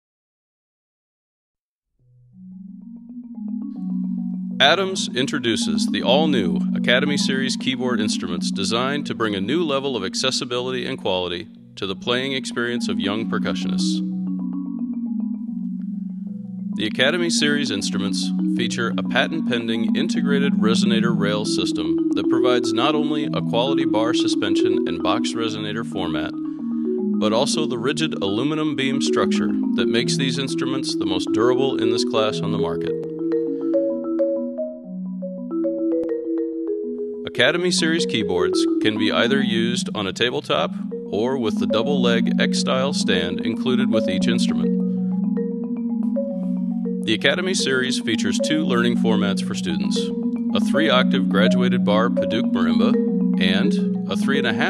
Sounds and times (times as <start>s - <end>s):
Vibraphone: 2.3s - 10.2s, 11.5s - 54.6s
Marimba, xylophone: 2.3s - 11.0s, 12.0s - 54.6s.